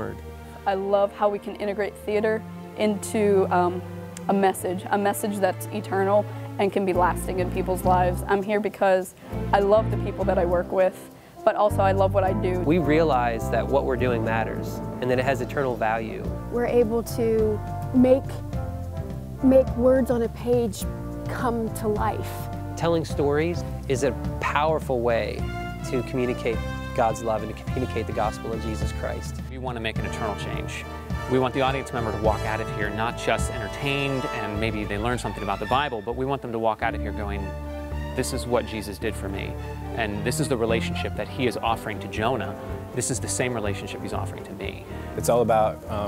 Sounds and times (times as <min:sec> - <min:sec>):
Music: 0:00.0 - 0:46.0
Speech: 0:09.6 - 0:18.4, 0:19.4 - 0:37.5, 0:38.2 - 0:46.0.